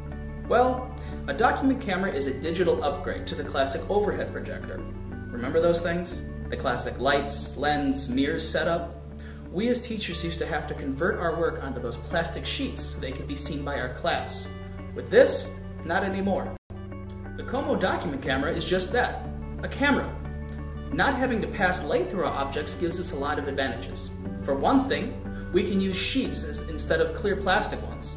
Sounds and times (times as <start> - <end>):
Music: 0.0 - 28.1
Speech: 0.5 - 16.6, 17.4 - 20.2, 20.9 - 28.1.